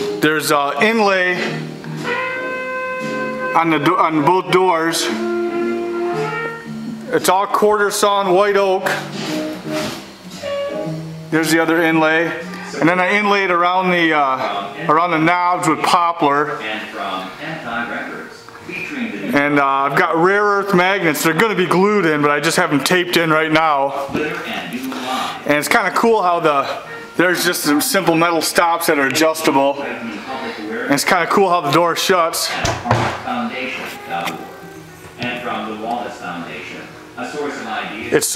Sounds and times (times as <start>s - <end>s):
Speech: 0.2s - 1.6s, 3.6s - 5.2s, 7.1s - 9.1s, 11.3s - 38.3s.